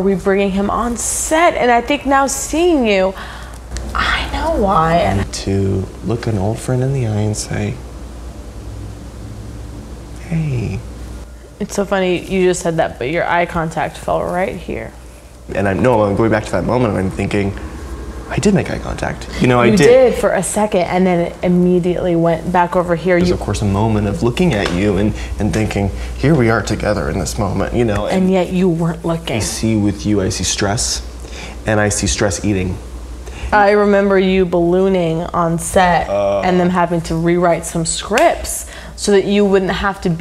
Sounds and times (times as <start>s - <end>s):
Female speech, woman speaking: 0.0s - 3.2s, 3.9s - 5.2s, 11.6s - 15.0s, 19.4s - 23.4s, 27.8s - 29.7s, 33.5s - 40.2s.